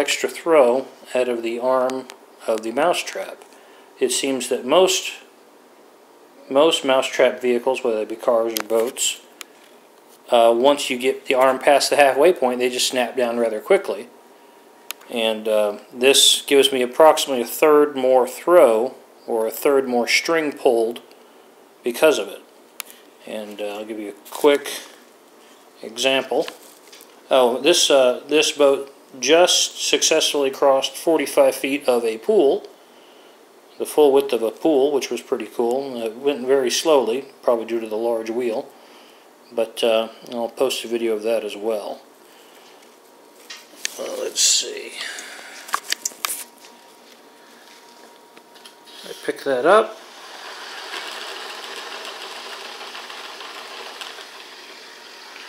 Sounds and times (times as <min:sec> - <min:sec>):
Speech: 0:00.0 - 0:03.4, 0:04.0 - 0:05.3, 0:06.4 - 0:09.3, 0:10.3 - 0:14.1, 0:15.1 - 0:21.1, 0:21.8 - 0:22.5, 0:23.2 - 0:25.0, 0:25.8 - 0:26.6, 0:27.3 - 0:32.7, 0:33.8 - 0:38.7, 0:39.5 - 0:42.1, 0:43.9 - 0:45.3, 0:49.0 - 0:50.0.